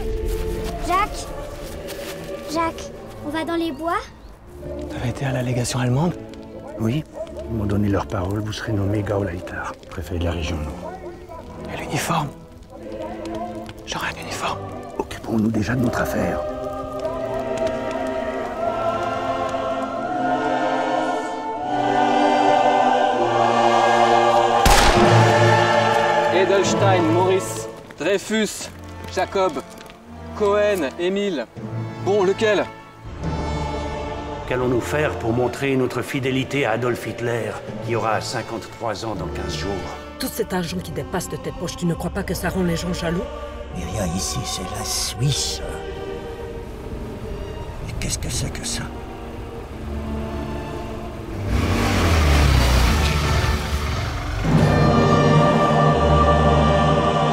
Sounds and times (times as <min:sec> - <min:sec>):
Music: 0:00.0 - 0:57.3.